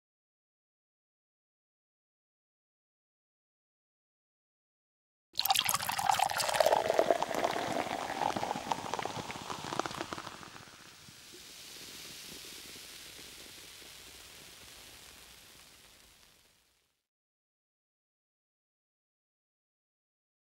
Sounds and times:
Pour: 5.4 - 16.4.

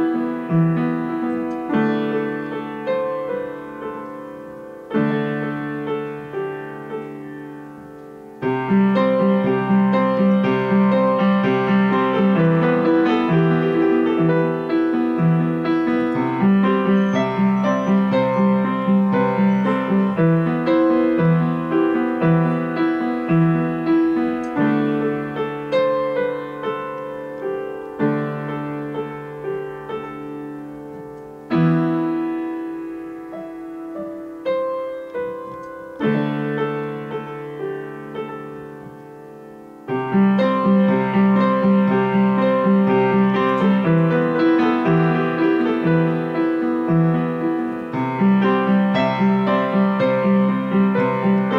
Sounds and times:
Music: 0.0 - 51.5.

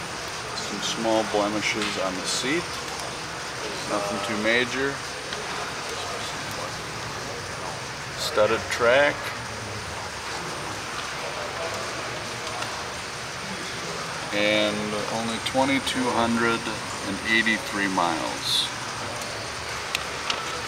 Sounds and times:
Speech: 0.6 - 2.7, 3.6 - 9.4, 14.3 - 19.1.

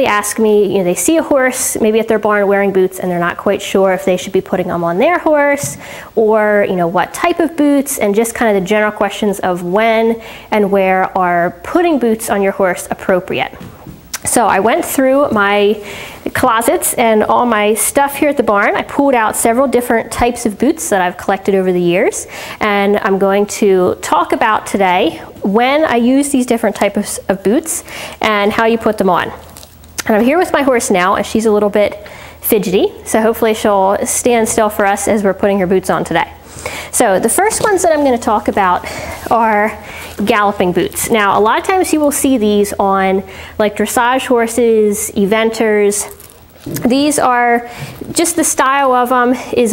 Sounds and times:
Speech: 0.0 - 13.6, 14.2 - 29.4, 30.0 - 49.7.

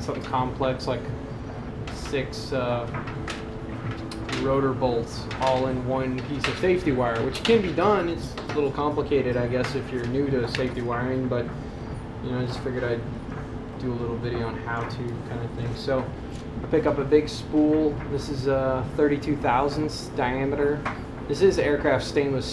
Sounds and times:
Speech: 0.0 - 1.1, 1.9 - 3.0, 4.2 - 11.5, 12.2 - 13.2, 13.8 - 22.5.

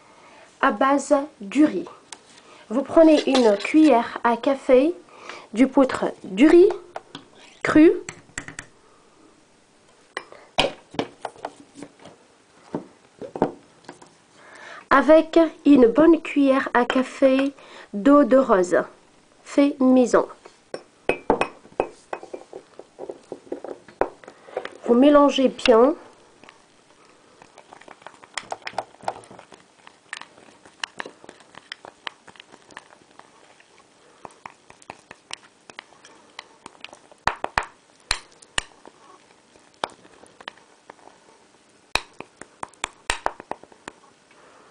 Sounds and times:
Speech: 0.6 - 2.0, 2.7 - 5.0, 5.6 - 6.9, 7.6 - 8.1, 14.9 - 20.4, 24.8 - 26.1.

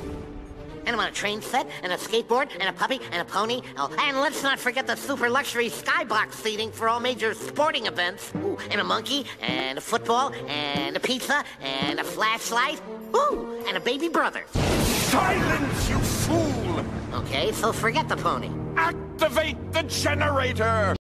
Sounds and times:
Music: 0.0 - 21.0
Speech: 0.9 - 21.0.

